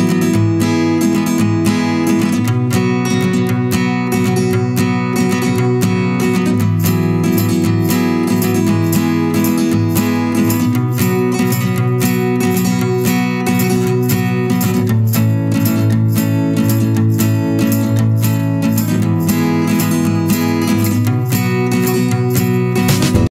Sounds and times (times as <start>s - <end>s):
Music: 0.0s - 23.3s.